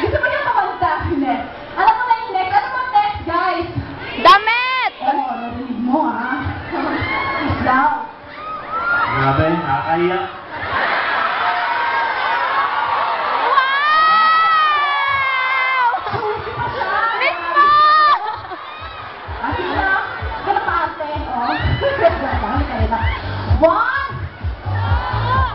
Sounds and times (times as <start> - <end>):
Cheering: 6.3 - 25.5.